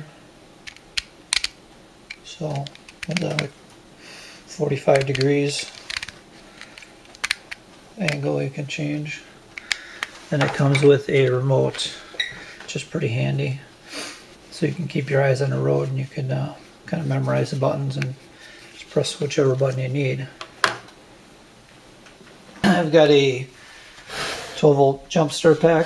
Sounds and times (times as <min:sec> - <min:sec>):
Speech: 0:02.3 - 0:03.5, 0:04.5 - 0:05.7, 0:08.0 - 0:09.3, 0:10.3 - 0:12.0, 0:12.7 - 0:13.7, 0:14.5 - 0:18.2, 0:18.8 - 0:20.4, 0:22.6 - 0:23.5, 0:24.6 - 0:25.8.